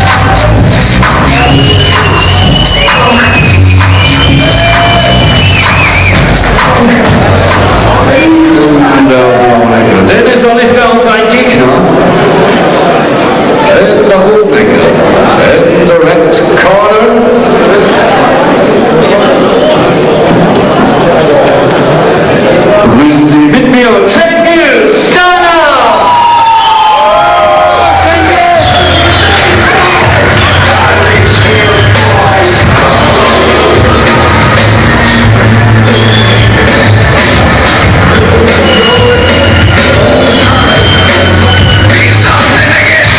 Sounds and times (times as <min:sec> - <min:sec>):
Music: 0:00.0 - 0:10.0, 0:27.3 - 0:43.1
Speech: 0:08.0 - 0:12.0, 0:13.6 - 0:26.0.